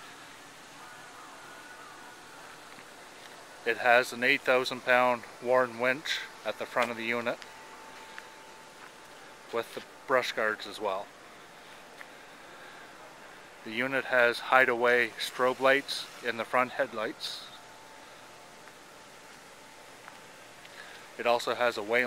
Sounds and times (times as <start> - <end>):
Speech: 3.6 - 7.4, 9.5 - 11.1, 13.0 - 17.6, 21.2 - 22.0.